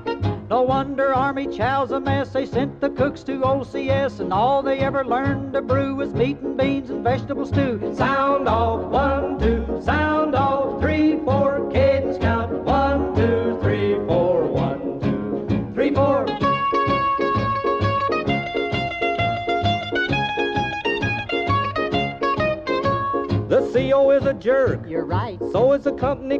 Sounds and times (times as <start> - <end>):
Music: 0.0 - 26.3.